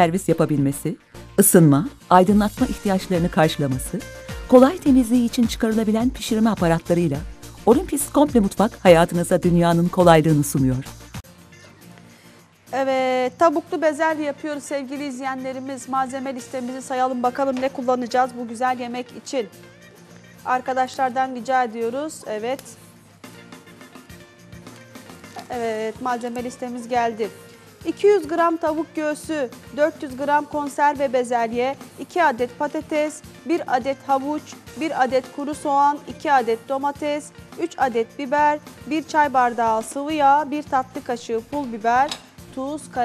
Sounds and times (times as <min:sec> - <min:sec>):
Speech: 0:00.0 - 0:10.9, 0:12.7 - 0:19.5, 0:20.5 - 0:22.8, 0:25.4 - 0:27.3, 0:27.9 - 0:43.0
Music: 0:00.0 - 0:43.0.